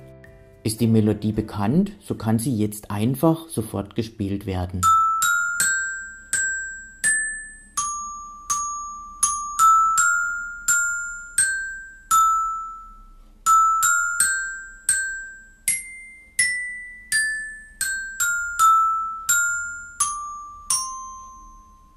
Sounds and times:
Glockenspiel: 4.8 - 21.9
Marimba, xylophone: 4.8 - 21.9.

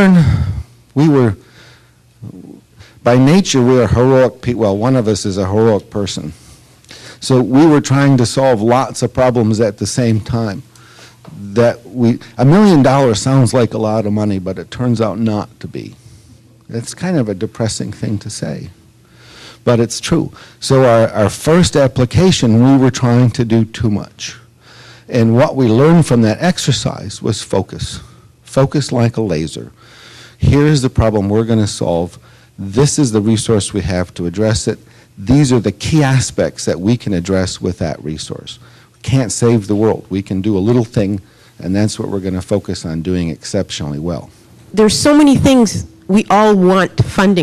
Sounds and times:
Narration, monologue: 0.0 - 47.4.

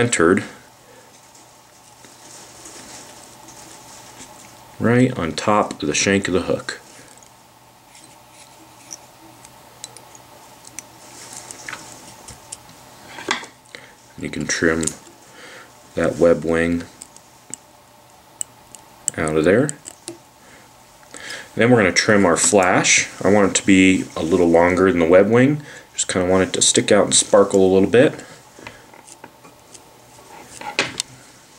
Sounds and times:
Speech: 0.0 - 0.6, 4.8 - 6.8, 14.2 - 15.0, 16.0 - 17.0, 19.2 - 19.8, 21.6 - 28.2.

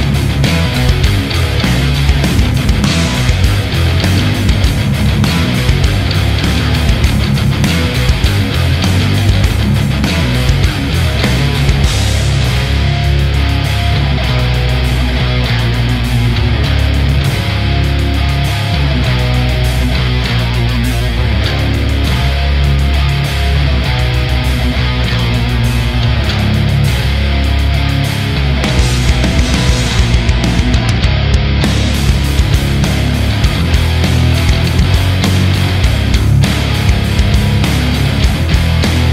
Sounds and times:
Steel guitar, slide guitar: 0.0 - 39.1.

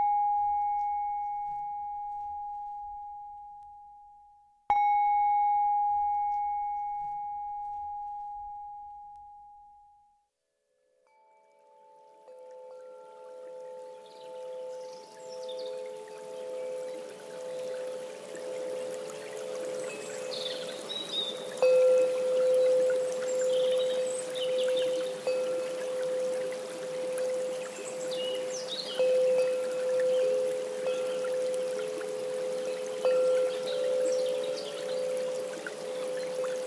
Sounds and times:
Music: 0.0 - 36.6.

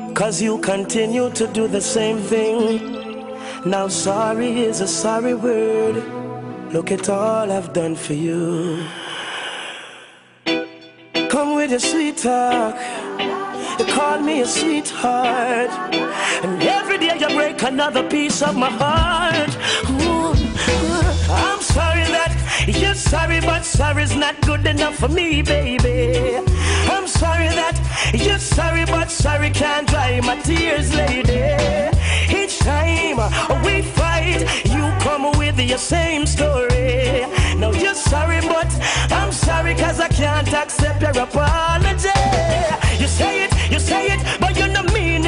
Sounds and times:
Music: 0.0 - 8.8, 10.3 - 45.2.

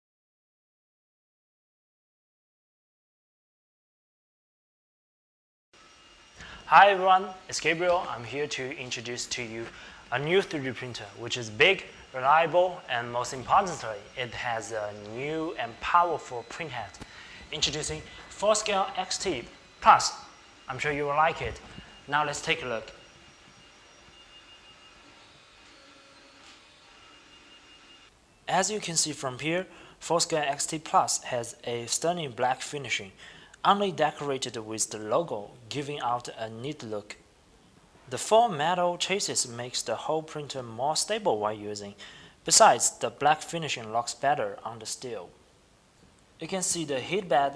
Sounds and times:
Speech: 6.7 - 23.0, 28.5 - 37.2, 38.1 - 45.4, 46.4 - 47.5
Printer: 9.6 - 28.1.

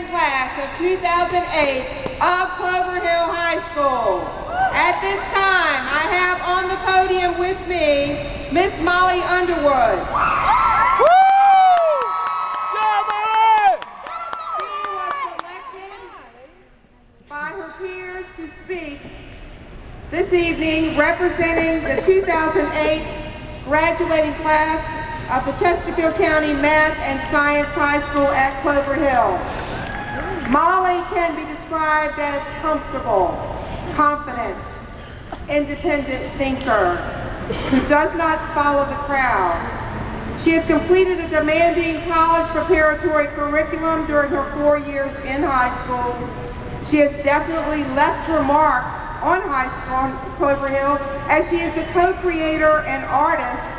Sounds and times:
Female speech, woman speaking: 0.0 - 10.0, 14.6 - 16.6, 17.3 - 19.0, 20.1 - 29.4, 30.5 - 34.7, 35.5 - 37.0, 37.8 - 39.7, 40.4 - 53.7.

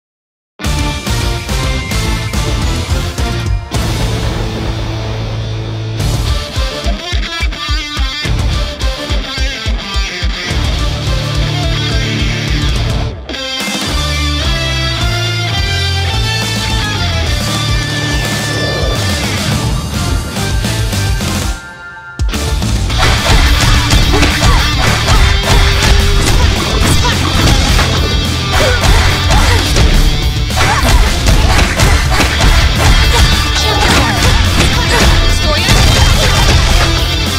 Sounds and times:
Theme music: 0.6 - 37.3.

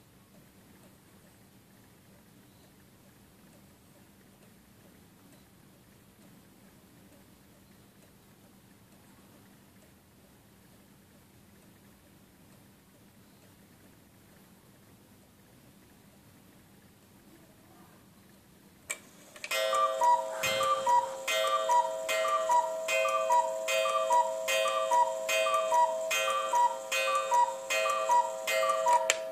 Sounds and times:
Tick-tock: 2.0 - 14.5, 18.9 - 29.3
Alarm clock: 19.5 - 29.3.

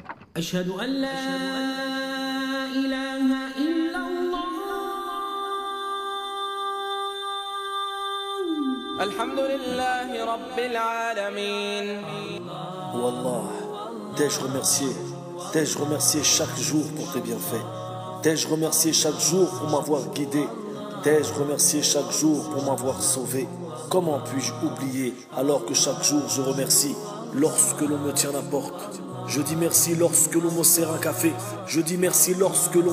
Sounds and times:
Music: 0.0 - 32.9
Speech: 12.9 - 17.6, 18.2 - 32.9.

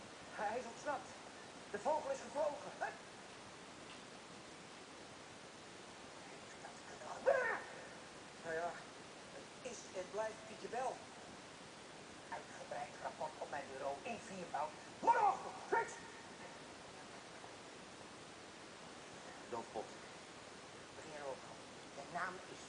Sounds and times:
Speech: 12.3 - 16.6.

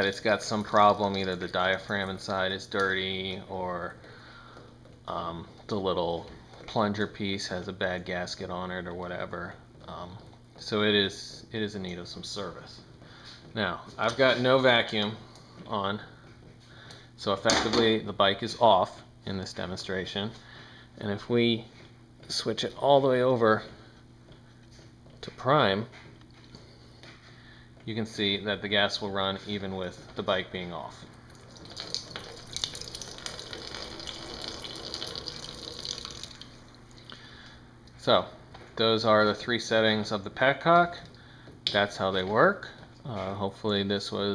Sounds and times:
Water: 31.3 - 37.2.

